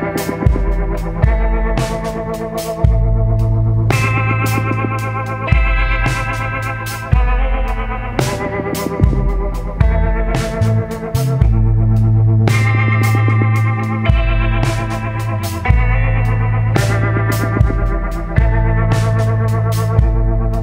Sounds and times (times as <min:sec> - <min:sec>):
Music: 0:00.0 - 0:20.6.